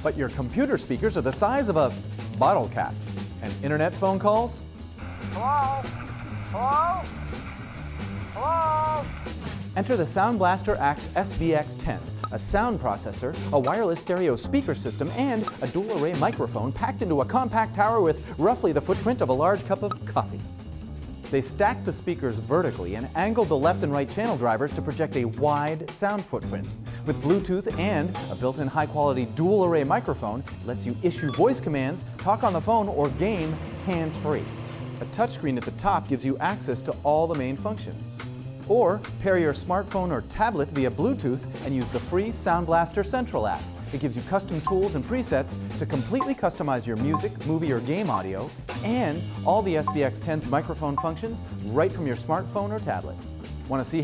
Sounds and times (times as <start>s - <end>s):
Speech: 0.0s - 4.6s, 6.6s - 7.1s, 9.8s - 20.4s, 21.3s - 38.1s, 38.7s - 54.0s
Music: 0.0s - 54.0s.